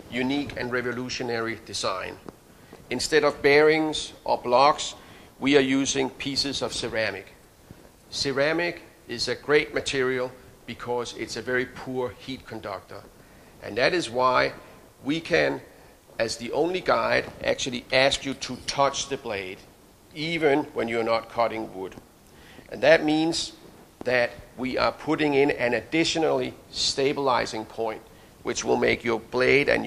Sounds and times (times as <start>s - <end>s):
Speech: 0.0s - 2.3s, 2.9s - 7.4s, 8.1s - 22.0s, 22.7s - 29.8s.